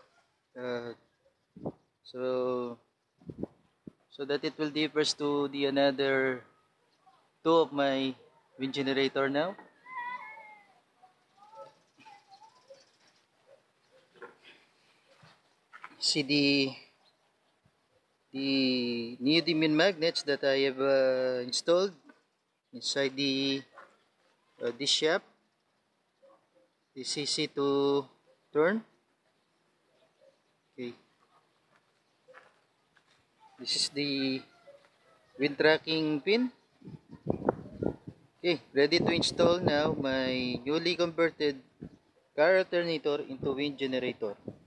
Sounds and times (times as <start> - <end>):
Speech: 16.0 - 16.8, 18.4 - 22.0, 33.6 - 34.5, 38.4 - 41.6, 42.4 - 44.4.